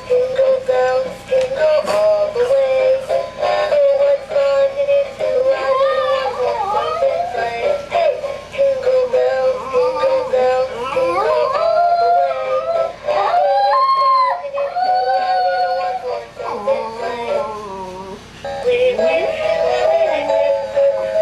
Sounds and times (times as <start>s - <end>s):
Music: 0.0s - 21.2s.